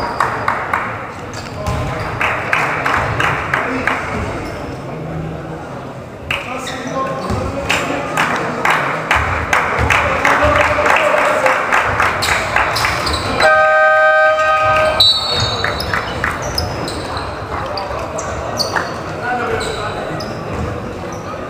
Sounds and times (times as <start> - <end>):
Speech: 1.4 - 12.0, 16.5 - 21.4.